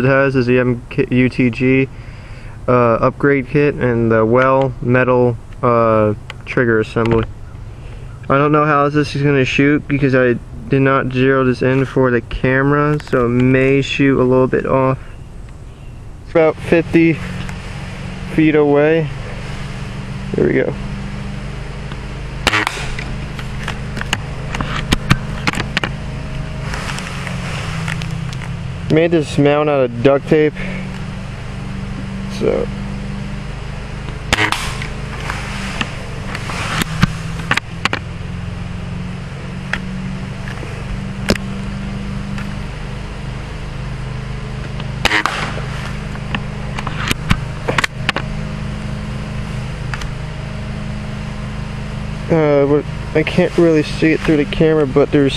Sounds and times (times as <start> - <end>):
Speech: 0.0 - 1.9, 2.7 - 7.3, 8.3 - 15.0, 16.3 - 17.2, 18.3 - 19.2, 20.3 - 20.8, 28.9 - 30.6, 32.2 - 32.7, 52.3 - 55.3.